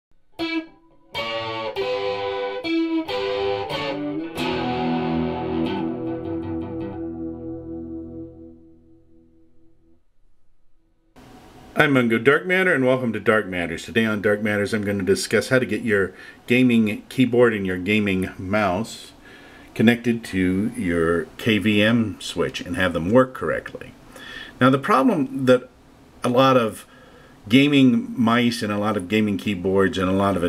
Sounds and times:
Distortion: 0.1s - 30.4s
Effects unit: 0.2s - 11.2s
Electric guitar: 0.3s - 10.0s.

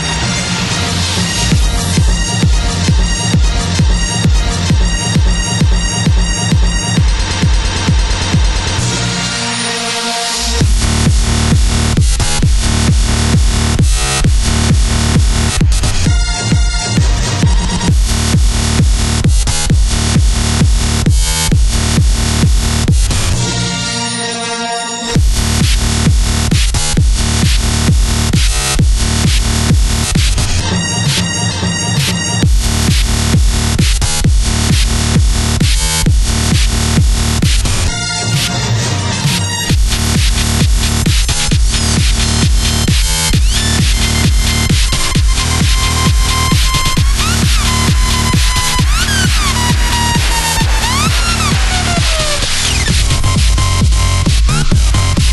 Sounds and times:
Disco: 0.0s - 23.8s, 25.1s - 55.3s.

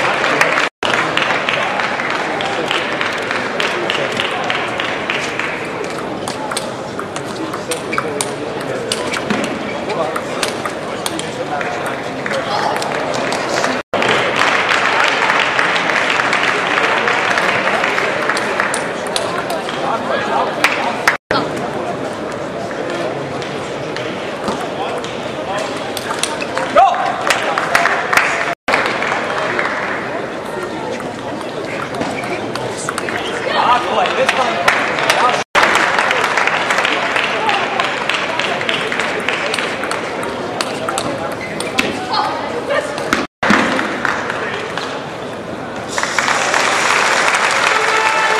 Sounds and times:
Speech: 0.0s - 28.5s, 29.2s - 43.2s.

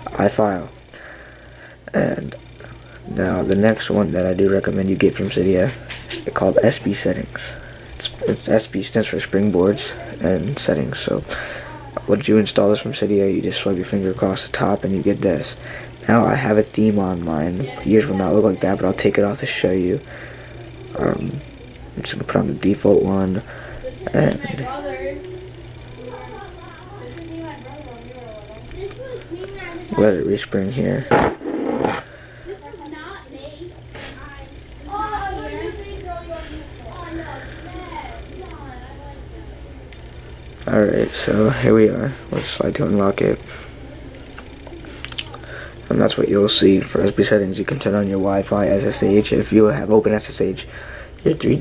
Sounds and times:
Inside, small room: 0.0s - 51.6s.

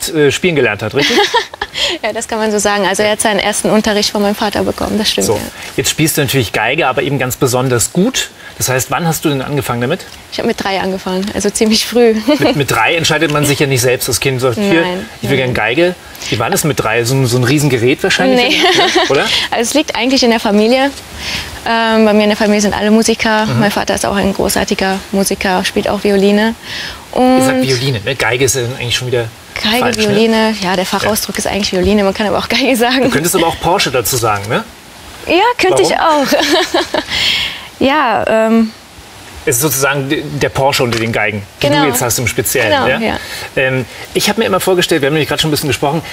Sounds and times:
Speech: 11.8s - 20.9s, 21.7s - 26.2s, 27.2s - 34.6s, 35.3s - 36.4s, 39.5s - 46.0s.

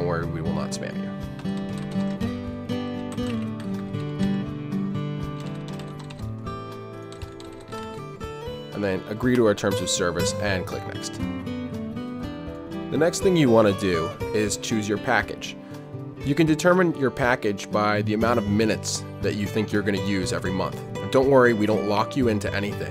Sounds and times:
Speech: 0.0s - 1.0s, 8.8s - 11.2s, 12.9s - 15.6s, 16.2s - 22.9s
Music: 0.0s - 22.9s.

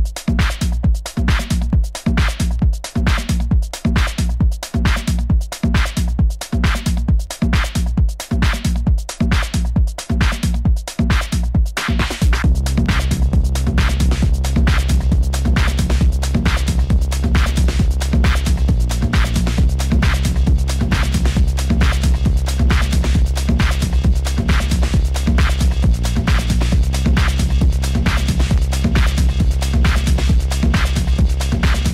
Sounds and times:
Techno: 0.0s - 31.9s.

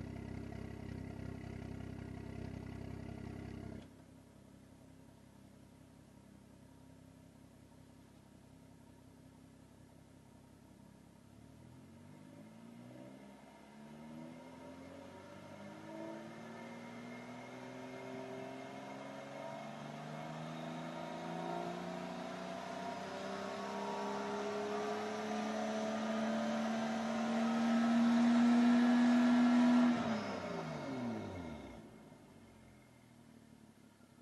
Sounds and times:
Vehicle: 0.0s - 34.2s
Accelerating, revving, vroom: 11.9s - 31.8s.

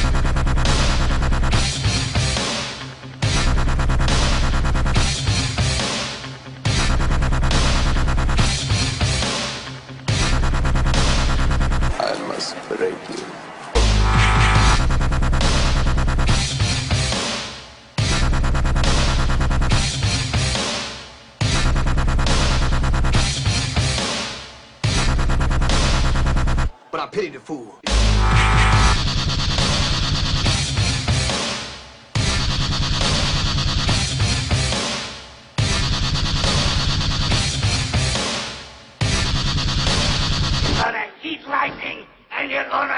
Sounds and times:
Dubstep: 0.0s - 12.0s, 13.8s - 26.8s, 27.9s - 40.9s
Speech: 12.0s - 13.4s, 26.9s - 27.9s, 40.8s - 42.9s.

